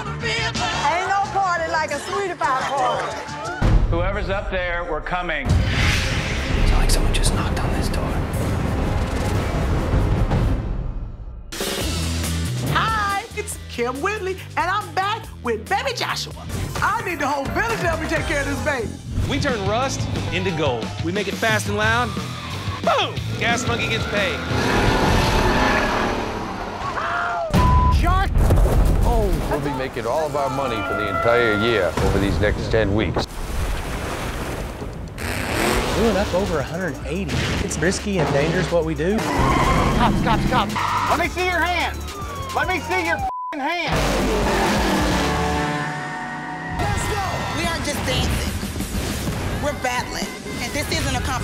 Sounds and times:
Music: 0.0 - 24.6, 36.0 - 51.4.

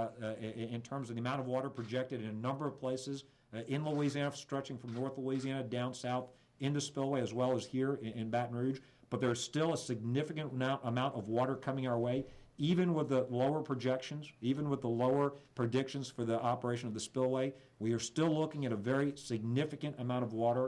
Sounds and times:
Speech: 0.0 - 20.6.

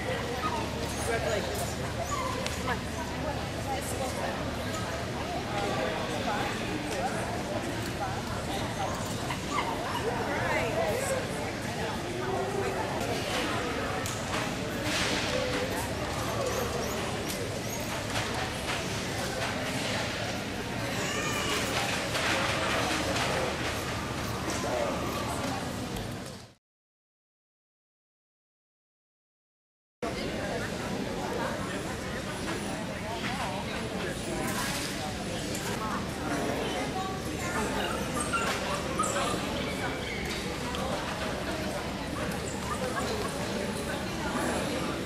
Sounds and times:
Speech: 0.0 - 26.6, 30.0 - 45.0.

